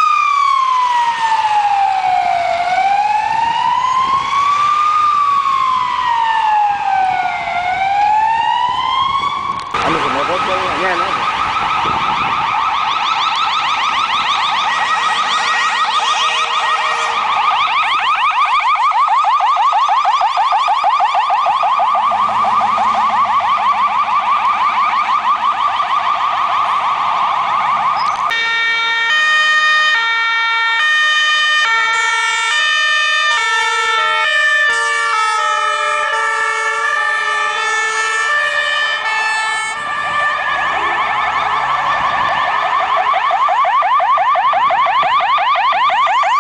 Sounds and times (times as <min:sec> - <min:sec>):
Ambulance (siren): 0:00.0 - 0:46.4.